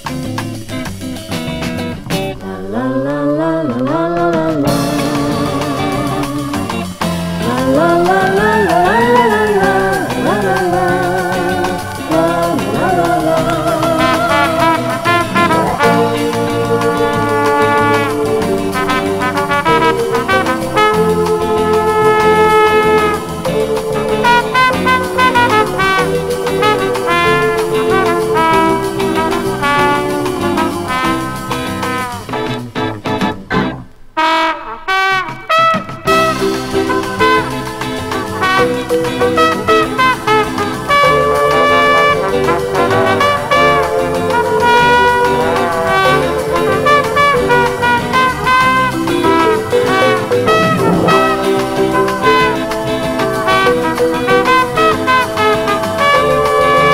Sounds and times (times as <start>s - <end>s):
Music: 0.0s - 56.9s.